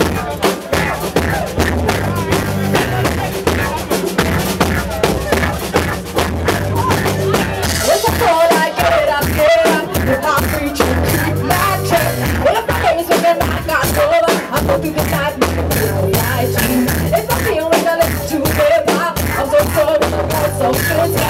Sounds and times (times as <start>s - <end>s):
Music: 0.0s - 21.3s
Speech: 0.0s - 21.3s.